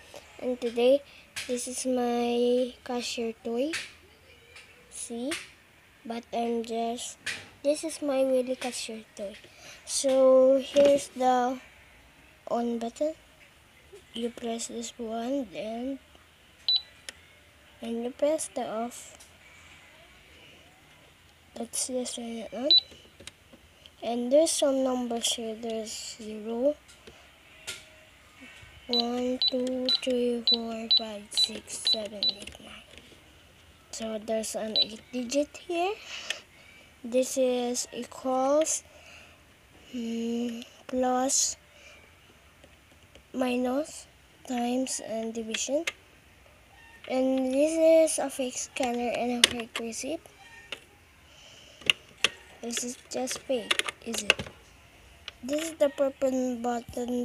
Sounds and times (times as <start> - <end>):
Speech: 0.4 - 5.4, 17.8 - 19.2, 24.0 - 26.8, 43.4 - 45.9, 47.1 - 50.2, 52.6 - 54.4, 55.4 - 57.2.